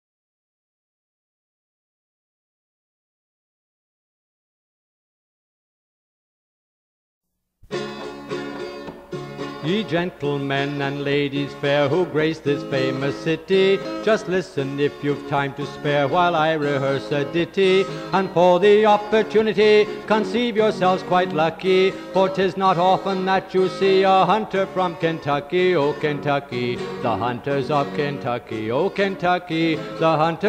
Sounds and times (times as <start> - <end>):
Banjo: 7.7 - 30.4.